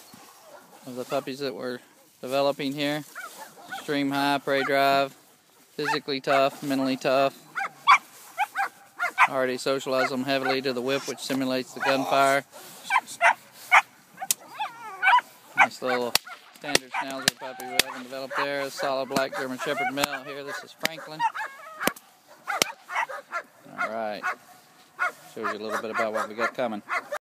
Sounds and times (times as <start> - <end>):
Speech: 0.9 - 3.0, 3.8 - 5.1, 5.8 - 7.4, 9.3 - 13.2, 15.6 - 21.3, 23.7 - 24.2, 25.3 - 27.0
Bow-wow: 3.2 - 3.9, 5.8 - 6.5, 7.6 - 9.4, 10.0 - 11.1, 11.8 - 12.2, 12.9 - 27.2.